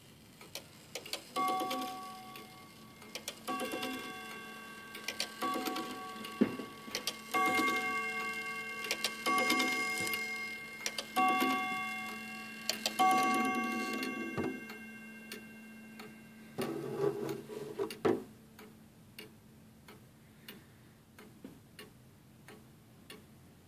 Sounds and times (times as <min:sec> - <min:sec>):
Tick-tock: 0:00.4 - 0:18.0, 0:18.6 - 0:20.6, 0:21.2 - 0:23.3.